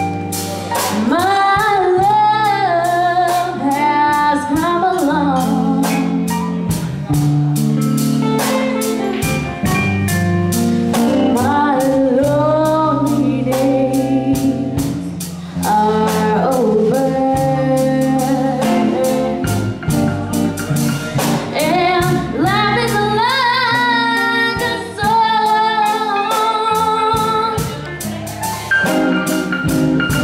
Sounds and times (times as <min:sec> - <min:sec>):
Inside, large room or hall: 0:00.0 - 0:30.2
Music: 0:00.0 - 0:30.2.